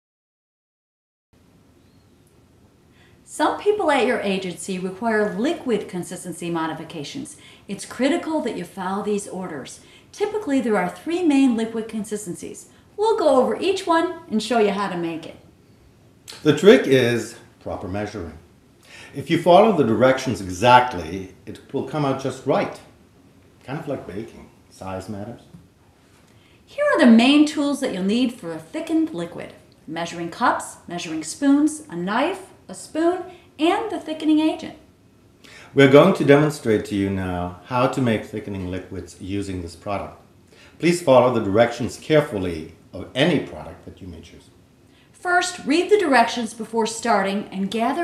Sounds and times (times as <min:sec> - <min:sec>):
Speech: 0:03.3 - 0:15.4, 0:16.3 - 0:18.4, 0:19.2 - 0:22.9, 0:23.7 - 0:25.5, 0:26.8 - 0:34.8, 0:35.8 - 0:40.2, 0:40.8 - 0:44.5, 0:45.2 - 0:48.0.